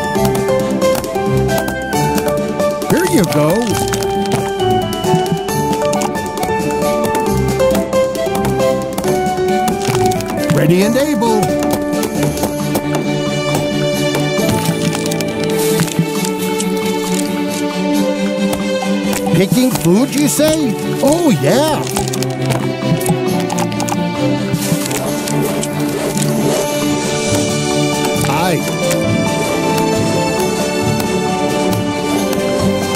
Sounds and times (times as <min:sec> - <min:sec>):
Music: 0:00.0 - 0:32.9
Speech: 0:02.9 - 0:03.7, 0:10.5 - 0:11.5, 0:19.3 - 0:21.9, 0:28.3 - 0:28.7.